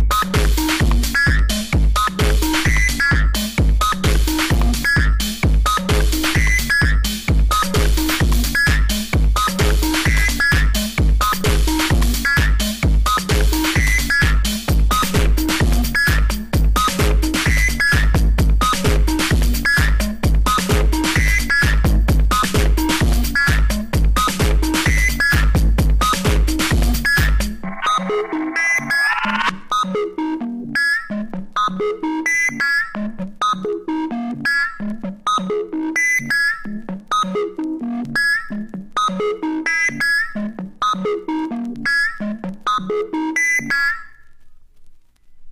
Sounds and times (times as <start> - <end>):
Electronic music: 0.0 - 44.4.